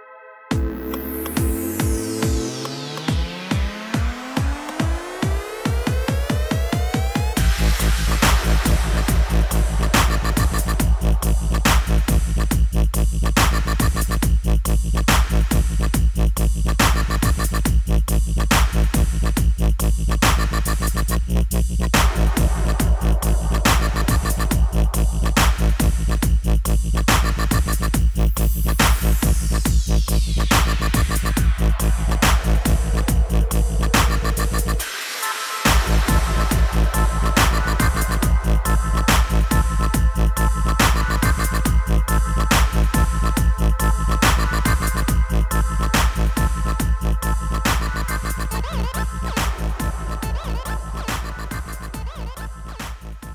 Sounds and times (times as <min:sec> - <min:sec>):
Dubstep: 0:00.5 - 0:53.3.